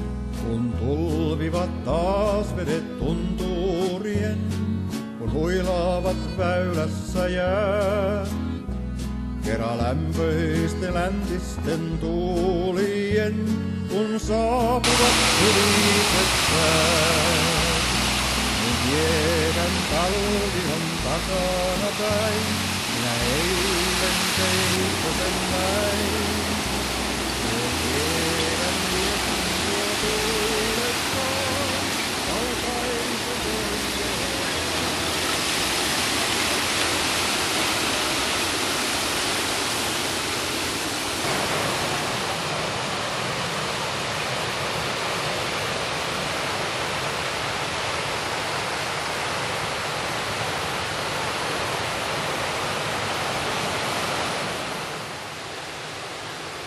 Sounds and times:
Music: 0.0s - 35.4s.

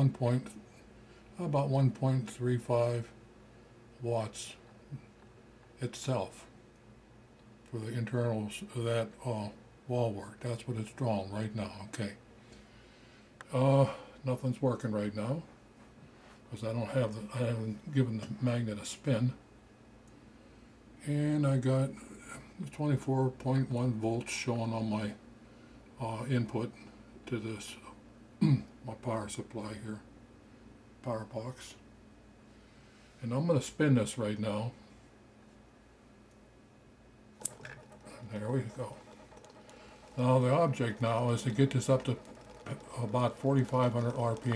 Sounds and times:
Speech: 0.0s - 0.6s, 1.4s - 3.2s, 4.0s - 5.0s, 5.8s - 6.5s, 7.7s - 12.2s, 13.5s - 15.5s, 16.5s - 19.4s, 21.0s - 25.2s, 26.0s - 30.1s, 31.0s - 31.8s, 33.2s - 34.8s, 38.1s - 39.1s, 40.2s - 44.5s.

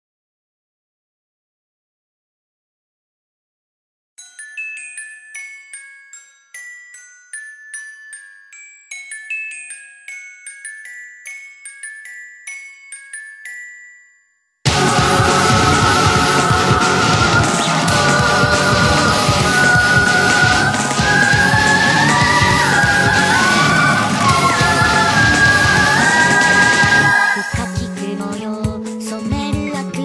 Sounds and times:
Glockenspiel: 4.2s - 30.0s.

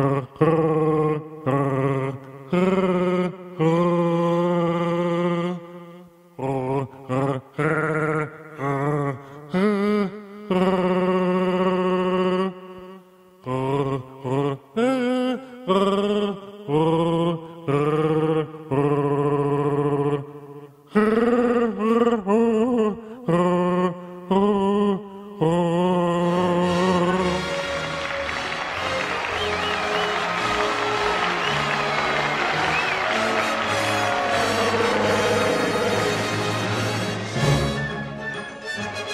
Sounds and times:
Music: 26.2s - 39.1s.

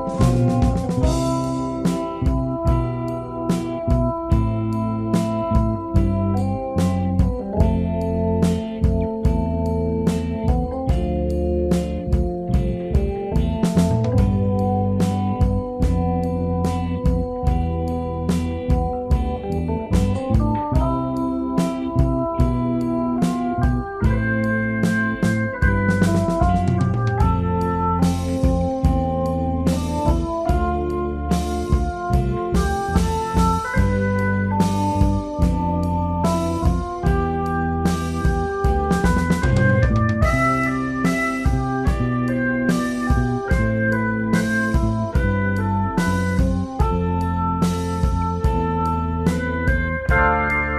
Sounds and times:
Music: 0.0s - 50.7s.

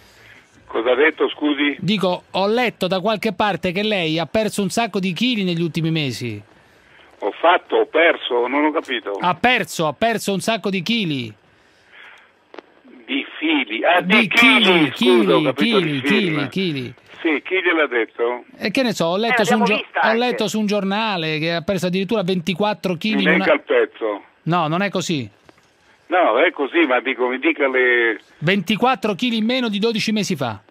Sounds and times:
Speech: 0.7s - 6.4s, 7.2s - 11.4s, 12.9s - 25.3s, 26.1s - 30.7s.

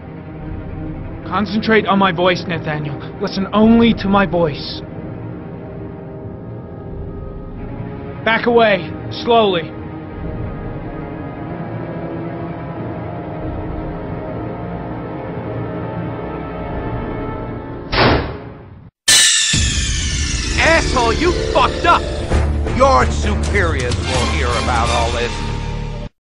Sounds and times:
Music: 0.0s - 26.2s
Speech: 1.3s - 4.8s, 8.3s - 9.7s, 20.6s - 25.4s.

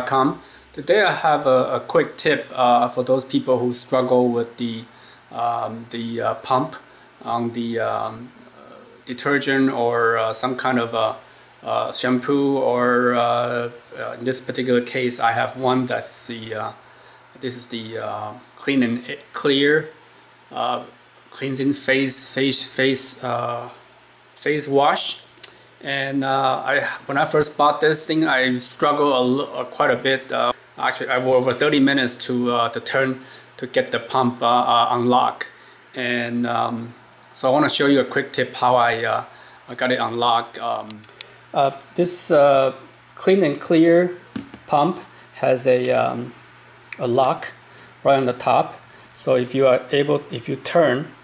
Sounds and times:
Speech: 0.0s - 16.8s, 17.4s - 23.8s, 24.4s - 51.2s.

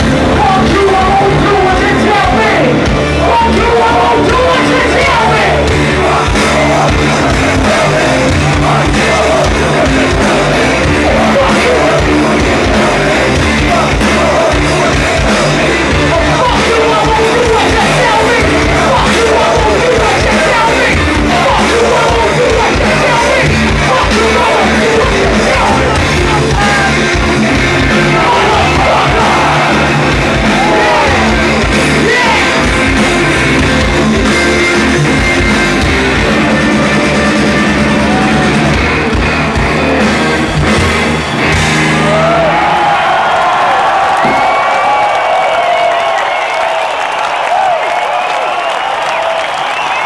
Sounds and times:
Music: 0.0s - 50.0s
Singing: 0.4s - 33.2s.

